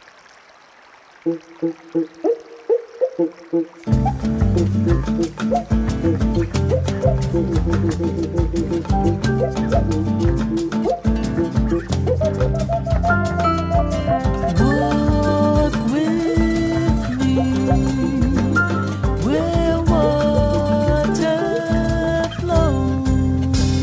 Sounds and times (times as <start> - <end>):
Jazz: 3.9 - 23.8.